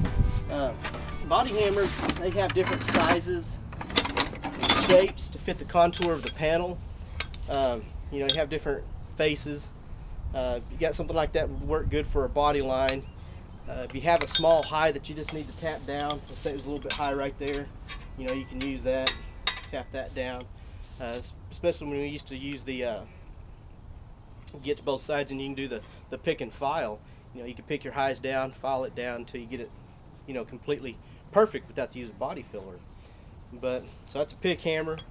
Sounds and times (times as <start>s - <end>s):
Speech: 0.5s - 3.6s, 4.7s - 6.8s, 7.5s - 9.7s, 10.4s - 13.0s, 13.7s - 23.1s, 24.5s - 29.7s, 30.3s - 32.8s, 33.5s - 35.0s.